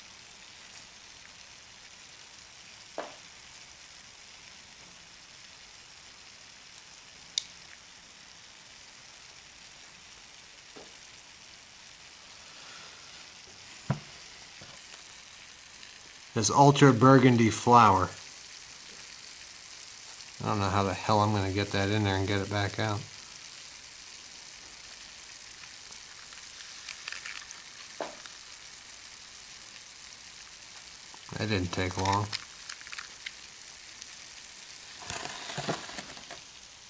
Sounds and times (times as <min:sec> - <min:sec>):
Inside, small room: 0:00.0 - 0:36.9
Speech: 0:16.4 - 0:18.2, 0:20.4 - 0:23.1, 0:31.3 - 0:32.4.